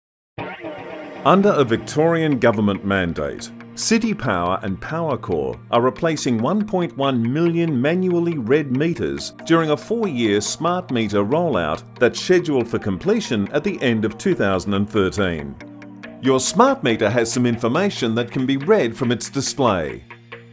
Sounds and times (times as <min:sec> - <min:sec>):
Music: 0:00.4 - 0:20.5
Speech: 0:01.3 - 0:15.6, 0:16.2 - 0:20.0.